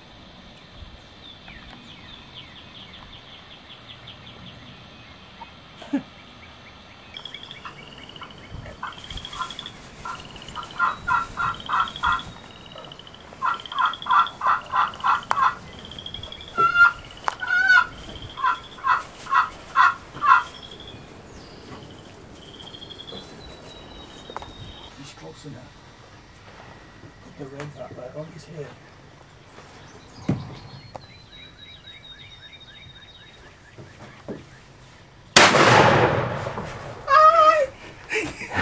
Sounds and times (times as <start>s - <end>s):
Gobble: 7.7s - 15.6s, 16.6s - 20.5s.